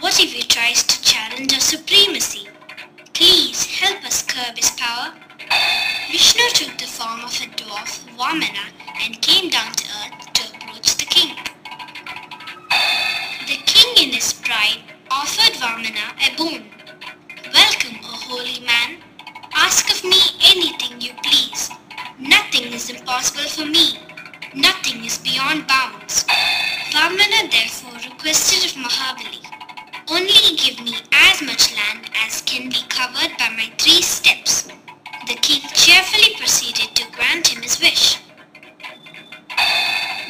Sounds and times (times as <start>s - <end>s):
Speech: 0.0s - 2.5s, 3.2s - 5.2s, 6.1s - 11.5s, 13.4s - 16.7s, 17.5s - 19.0s, 19.6s - 24.0s, 24.6s - 26.3s, 26.9s - 29.5s, 30.1s - 34.7s, 35.3s - 38.3s
Music: 0.0s - 40.3s.